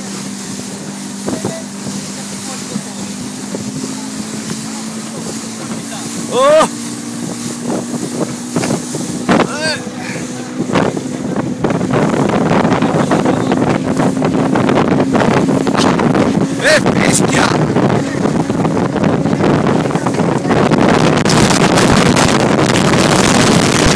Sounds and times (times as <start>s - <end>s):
Motorboat, speedboat: 0.0s - 23.9s
Wind noise (microphone): 0.0s - 23.9s.